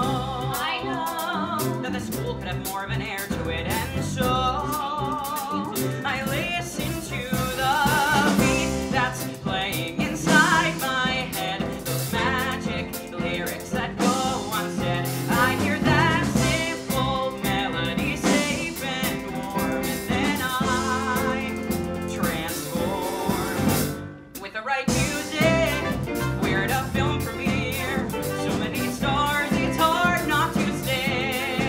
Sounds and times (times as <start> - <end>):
Jazz: 0.0 - 31.6
Pop music: 0.0 - 31.6
Rhythm and blues: 0.0 - 31.6.